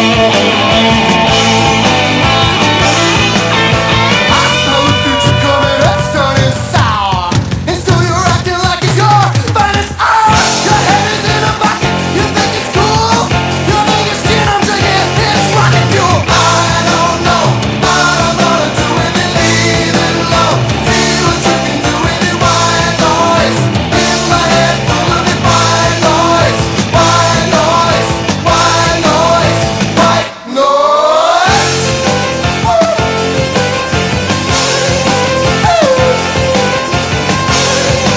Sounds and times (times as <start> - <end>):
Grunge: 0.0 - 38.1.